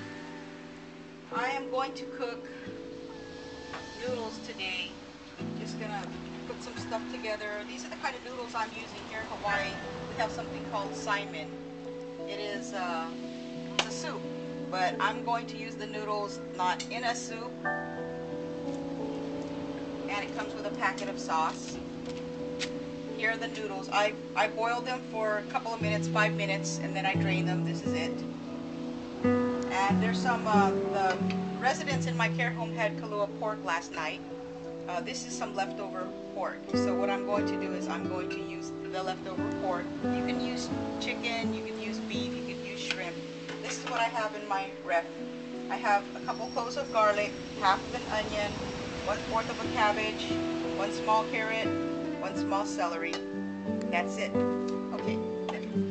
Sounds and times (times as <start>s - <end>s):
Music: 0.0s - 55.9s
Speech: 1.4s - 2.6s, 4.0s - 4.9s, 5.5s - 11.5s, 12.3s - 13.2s, 13.8s - 17.5s, 20.1s - 21.8s, 23.2s - 28.2s, 29.7s - 34.2s, 34.9s - 45.1s, 45.7s - 48.5s, 49.1s - 53.2s, 53.9s - 55.8s.